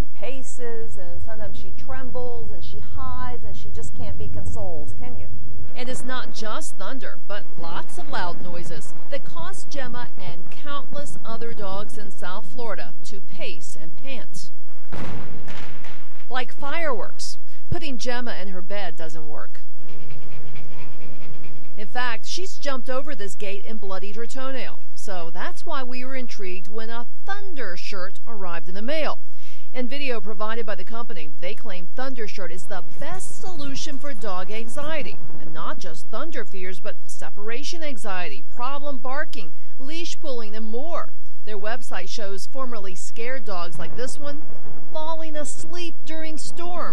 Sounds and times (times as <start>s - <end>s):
Speech: 0.2s - 14.5s, 16.3s - 19.6s, 21.8s - 44.4s, 45.0s - 46.9s.